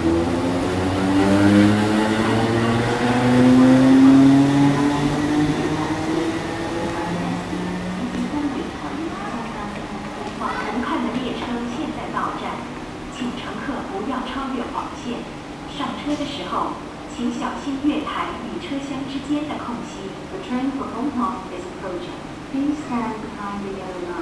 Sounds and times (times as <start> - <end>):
Speech: 6.8 - 24.2.